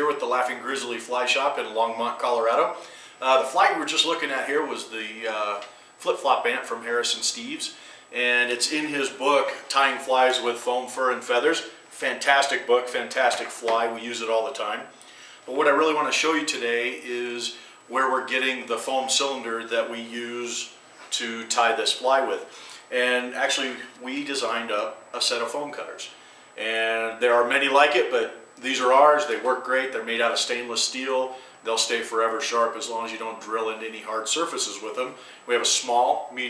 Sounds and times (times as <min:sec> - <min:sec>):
Speech: 0:00.0 - 0:14.9, 0:15.5 - 0:36.5.